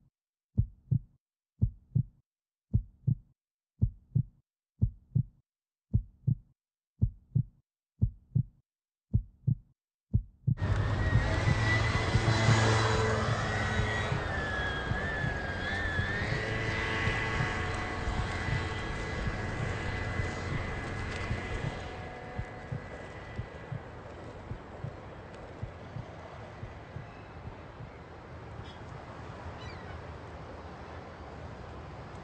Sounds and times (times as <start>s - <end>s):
Heart sounds, heartbeat: 0.6s - 2.1s, 2.7s - 3.2s, 3.8s - 5.3s, 5.9s - 8.5s, 9.1s - 13.0s, 17.0s - 28.0s.